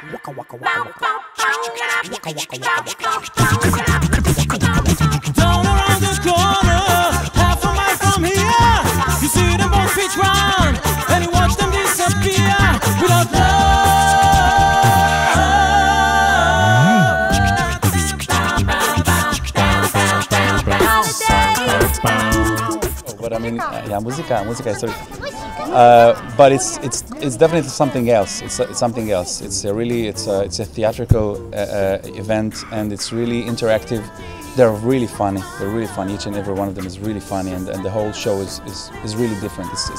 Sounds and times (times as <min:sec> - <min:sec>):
Female singing: 0:00.0 - 0:04.0, 0:04.6 - 0:29.3, 0:33.2 - 0:39.9
Music: 0:00.0 - 0:39.9
Speech: 0:23.1 - 0:39.9.